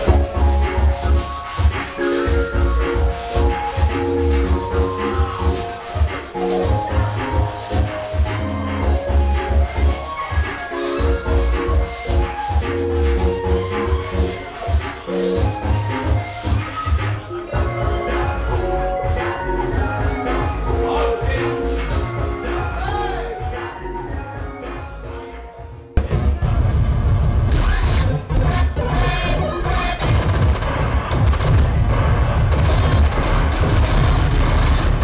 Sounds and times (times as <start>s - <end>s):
Dance music: 0.0s - 35.0s.